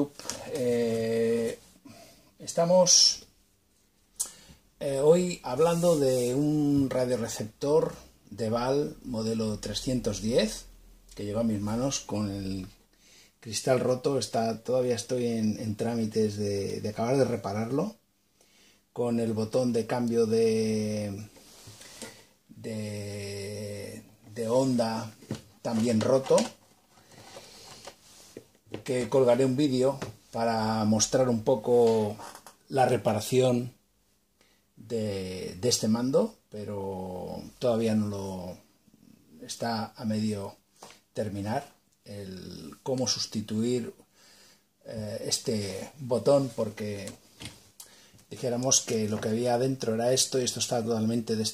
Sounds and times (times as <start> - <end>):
Speech: 0.0 - 1.7, 2.4 - 3.3, 4.8 - 12.8, 13.4 - 18.0, 19.0 - 21.3, 22.5 - 26.6, 28.8 - 33.8, 34.8 - 38.7, 39.3 - 40.6, 41.2 - 44.0, 44.8 - 47.2, 48.3 - 51.5.